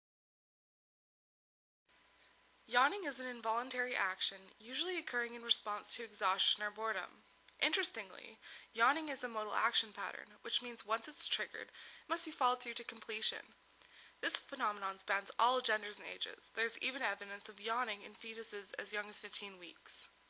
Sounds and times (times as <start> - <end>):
Speech: 2.7 - 13.6, 14.2 - 20.2.